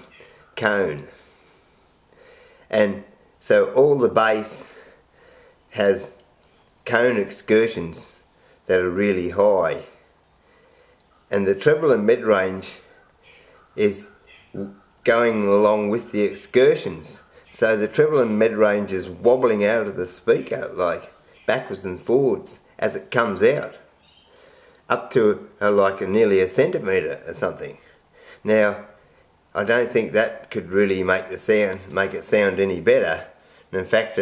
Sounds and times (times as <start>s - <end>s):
Speech: 0.0s - 1.2s, 2.7s - 4.8s, 5.7s - 6.2s, 6.8s - 10.0s, 11.3s - 12.9s, 13.8s - 23.9s, 24.9s - 29.0s, 29.6s - 34.2s.